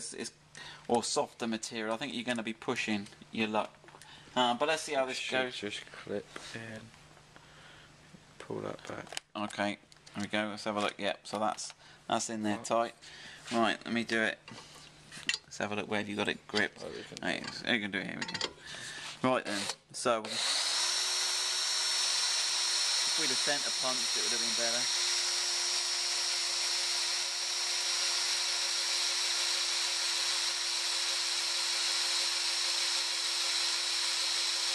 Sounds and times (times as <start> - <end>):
Speech: 0.0 - 3.7, 8.4 - 14.4, 15.5 - 18.4, 19.2 - 20.4, 23.2 - 24.9
Drill: 19.5 - 34.7.